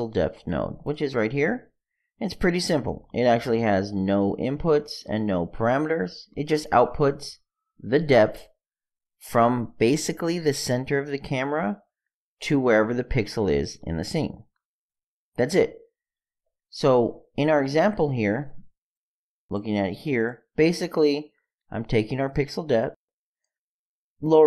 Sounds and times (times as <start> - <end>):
Speech: 0.0 - 8.6, 9.2 - 14.5, 15.4 - 15.8, 16.7 - 18.7, 19.5 - 23.0, 24.2 - 24.4.